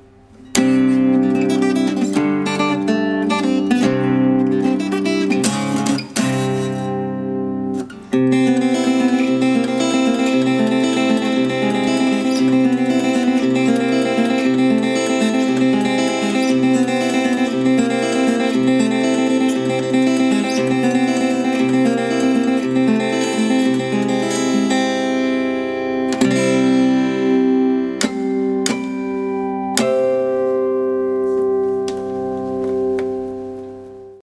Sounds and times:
Acoustic guitar: 0.0 - 34.2.

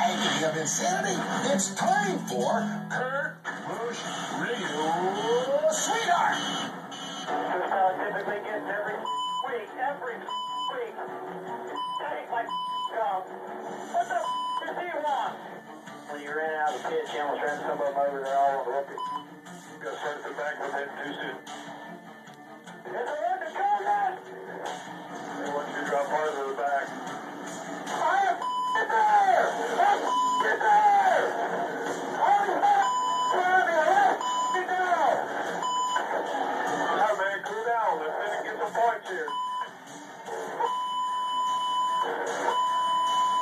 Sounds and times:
Radio: 0.0 - 11.0, 11.8 - 15.5, 16.1 - 19.2, 19.8 - 21.4, 22.8 - 24.2, 25.4 - 26.9, 27.9 - 39.7.

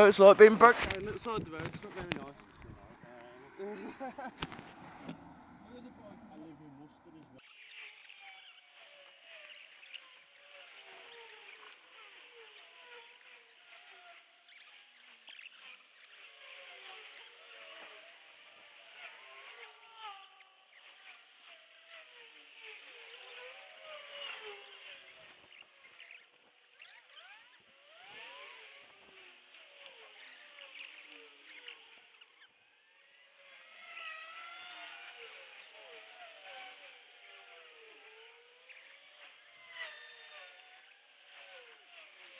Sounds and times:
Outside, urban or manmade: 0.0 - 42.3.

